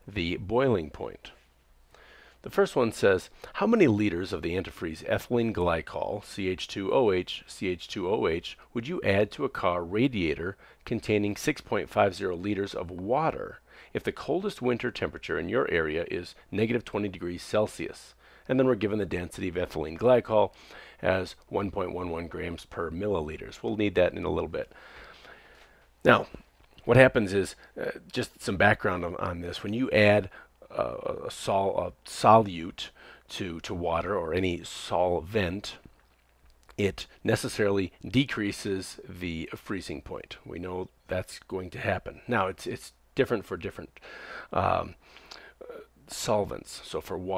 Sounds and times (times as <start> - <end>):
Speech: 0.0 - 1.4, 2.4 - 24.7, 26.0 - 35.9, 36.7 - 45.0, 45.6 - 47.3.